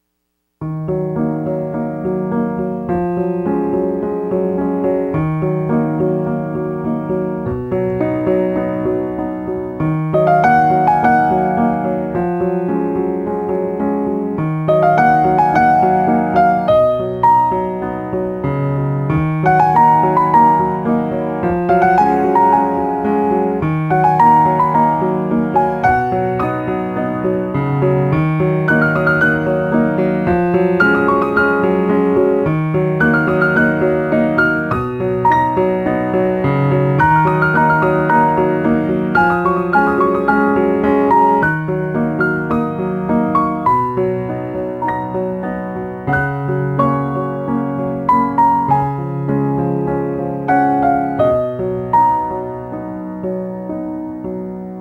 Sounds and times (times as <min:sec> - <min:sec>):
Music: 0:00.0 - 0:54.8.